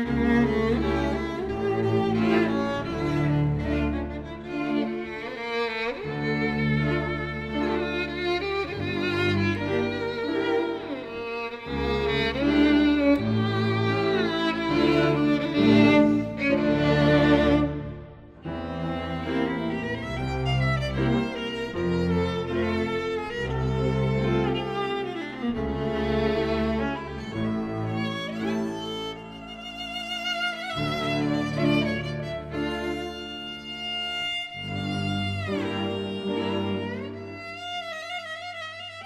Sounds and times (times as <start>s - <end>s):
Violin, fiddle: 0.0s - 39.0s.